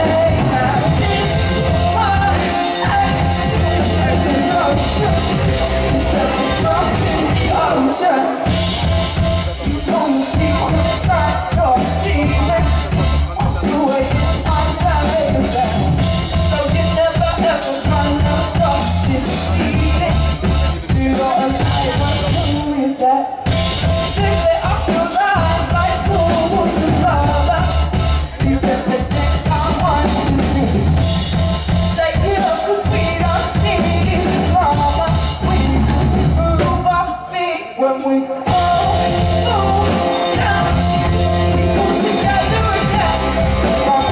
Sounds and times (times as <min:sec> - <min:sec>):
Music: 0:00.0 - 0:44.1
Speech: 0:09.2 - 0:16.0.